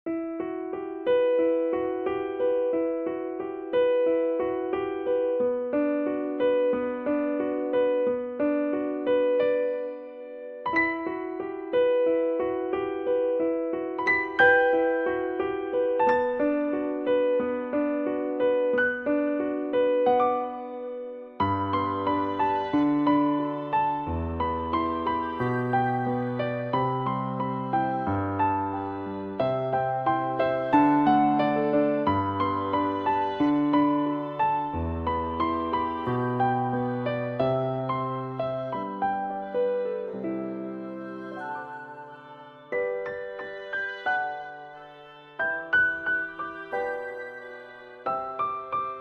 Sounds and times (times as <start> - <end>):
Electric piano: 0.1 - 49.0.